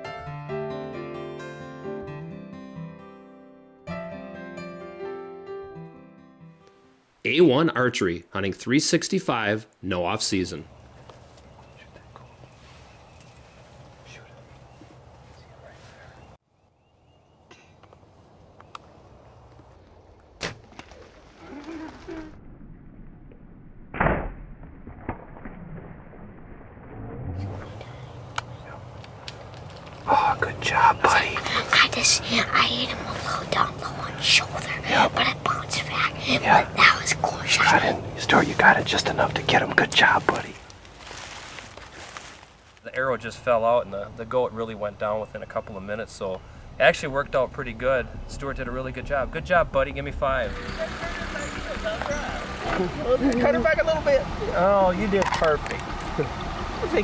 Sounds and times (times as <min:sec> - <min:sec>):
Outside, rural or natural: 0:06.4 - 0:57.0.